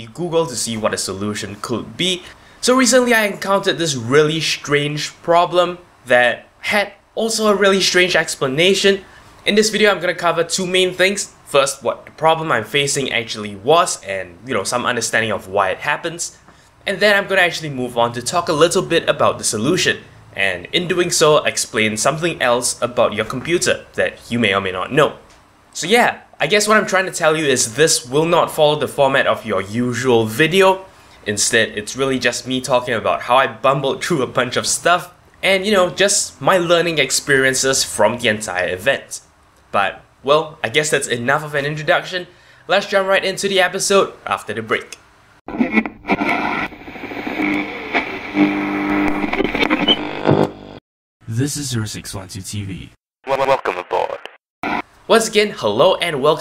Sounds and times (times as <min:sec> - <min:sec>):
Speech: 0:00.0 - 0:25.2, 0:25.8 - 0:45.0, 0:51.3 - 0:54.3, 0:55.1 - 0:56.4.